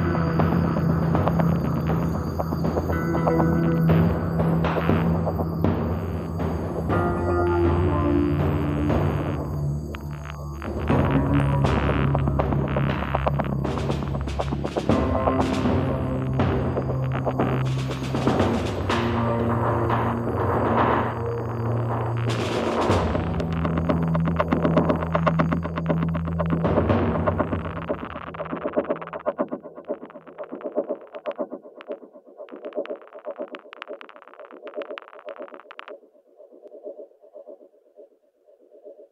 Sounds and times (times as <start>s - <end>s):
Background music: 0.0s - 30.7s
Soundtrack music: 0.0s - 30.9s.